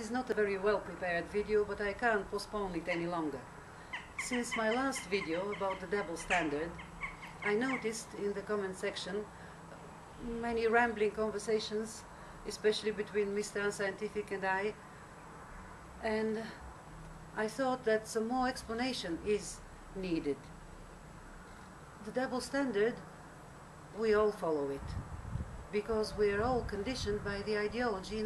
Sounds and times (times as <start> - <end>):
Female speech, woman speaking: 0.0 - 3.5, 4.2 - 6.8, 7.4 - 9.3, 10.2 - 14.8, 16.0 - 16.6, 17.4 - 20.5, 22.0 - 23.1, 24.0 - 25.0, 25.7 - 28.2.